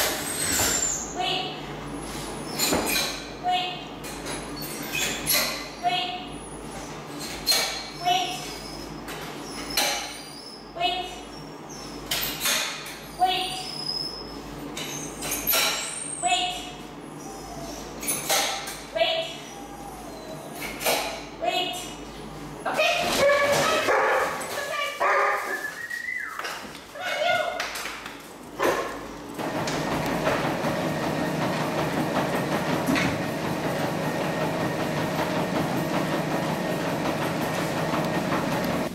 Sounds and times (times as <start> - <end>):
Speech: 1.2 - 1.6, 3.4 - 3.9, 5.8 - 6.3, 10.8 - 11.2, 13.2 - 13.7, 16.2 - 16.8, 18.9 - 19.4, 21.4 - 22.0, 22.6 - 23.9, 24.5 - 25.0, 27.0 - 27.7.